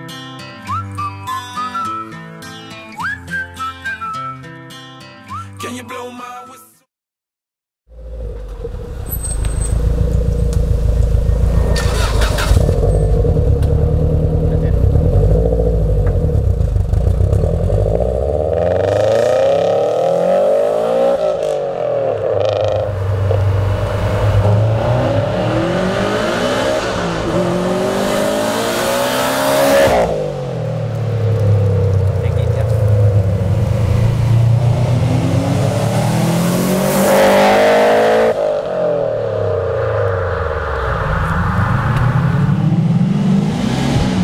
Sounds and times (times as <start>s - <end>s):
Speech: 14.5s - 14.9s, 32.2s - 32.8s.